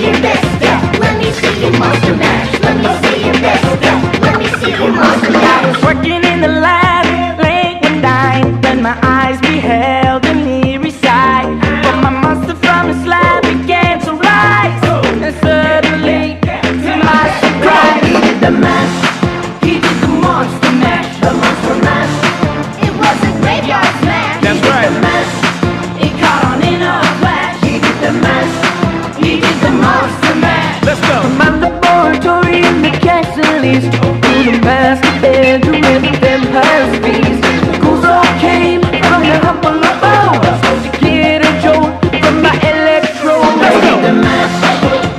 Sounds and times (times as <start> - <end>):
Music: 0.0 - 45.1.